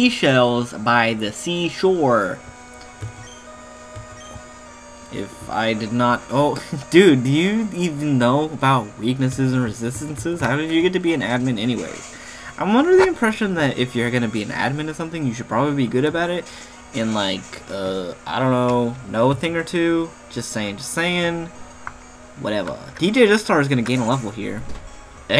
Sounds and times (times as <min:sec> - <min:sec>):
Speech: 0:00.0 - 0:02.4, 0:05.2 - 0:21.5, 0:22.4 - 0:24.7
Music: 0:00.0 - 0:25.4.